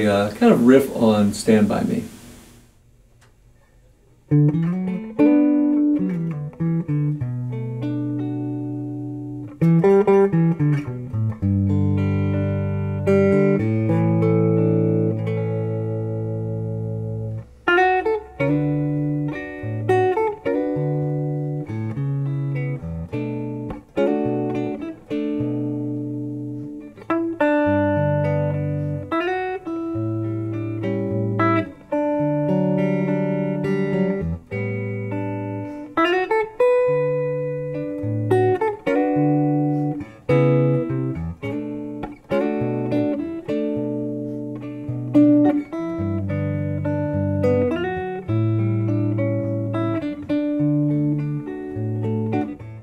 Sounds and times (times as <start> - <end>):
Inside, small room: 0.0 - 52.8
Electric guitar: 3.2 - 52.8.